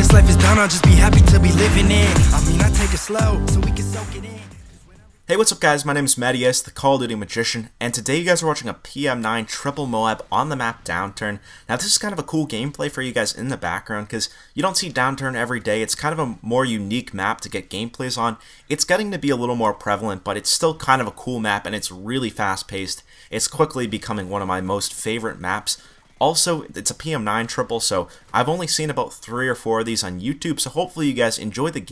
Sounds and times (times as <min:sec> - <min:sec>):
Speech: 0:04.2 - 0:31.9.